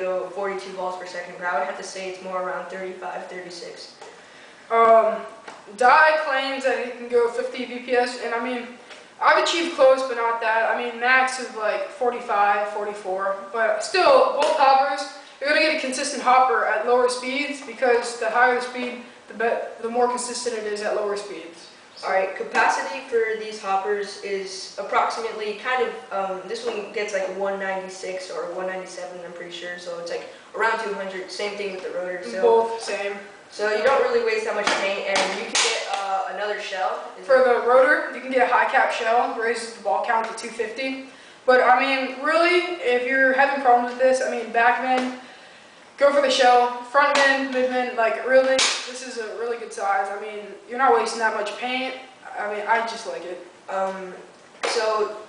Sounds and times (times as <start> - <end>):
Speech: 0.0 - 45.4, 46.0 - 55.2.